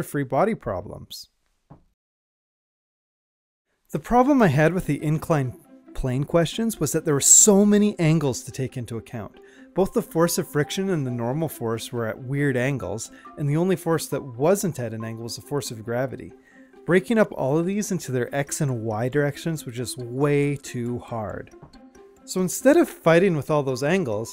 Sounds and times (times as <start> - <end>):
Narration, monologue: 0.0 - 2.0, 3.8 - 24.3.